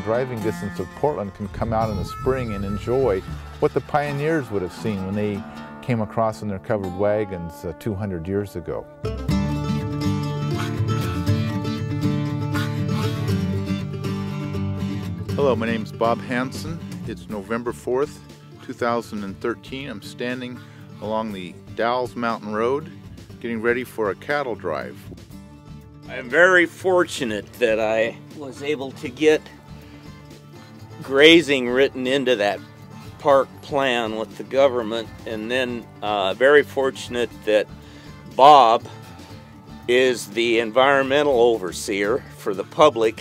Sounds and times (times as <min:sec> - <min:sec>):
Speech: 0:00.0 - 0:08.8, 0:15.4 - 0:25.0, 0:26.1 - 0:29.5, 0:31.0 - 0:32.6, 0:33.2 - 0:37.7, 0:38.4 - 0:38.9, 0:39.9 - 0:43.2
Music: 0:00.0 - 0:43.2.